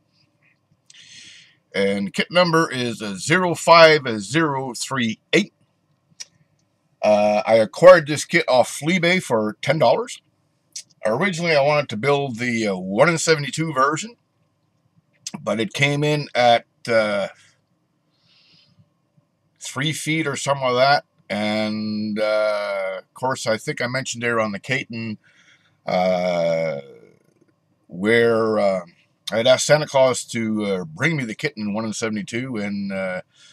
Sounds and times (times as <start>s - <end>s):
Speech: 1.0s - 5.5s, 7.0s - 10.2s, 10.8s - 14.1s, 15.3s - 17.3s, 19.6s - 25.2s, 25.9s - 27.2s, 27.9s - 33.2s.